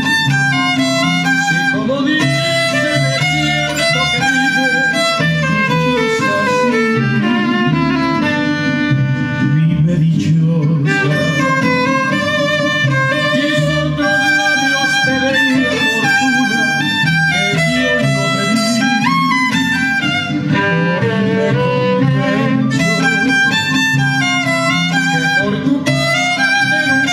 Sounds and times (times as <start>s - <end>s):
Violin, fiddle: 0.0s - 27.1s.